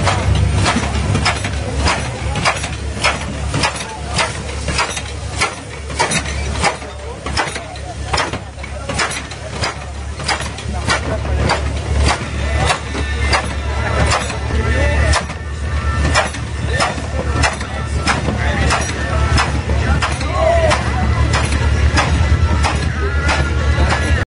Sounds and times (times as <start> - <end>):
Speech: 0.0 - 24.2
Music: 11.4 - 24.2.